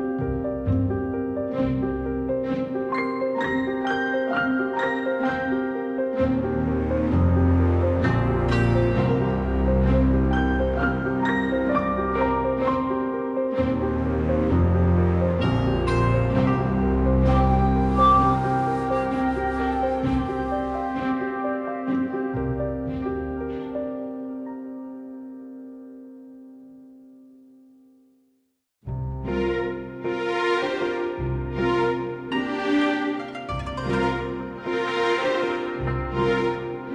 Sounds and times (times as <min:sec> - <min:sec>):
Background music: 0:00.0 - 0:26.9, 0:28.9 - 0:36.9.